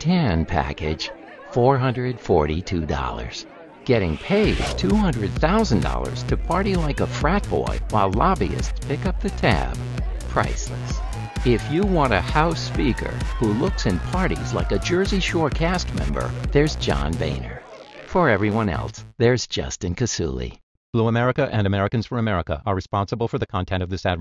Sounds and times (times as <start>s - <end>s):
Speech: 0.0s - 24.2s
Music: 4.4s - 19.1s.